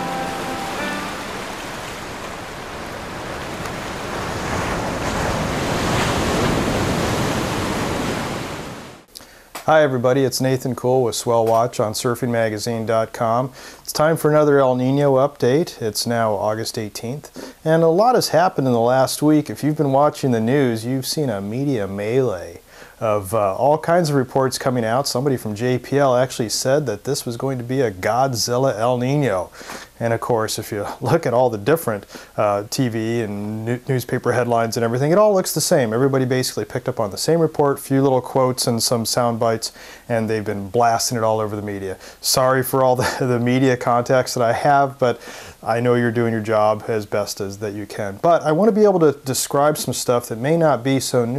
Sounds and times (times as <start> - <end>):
Waves, surf: 0.0 - 9.1.